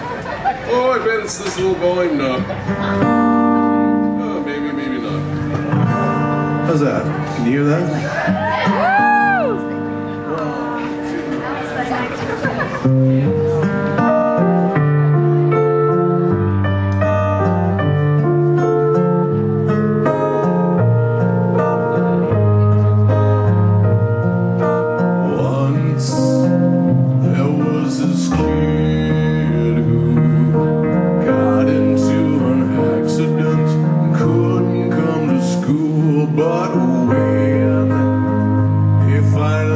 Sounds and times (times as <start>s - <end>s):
Tender music: 13.4s - 25.6s.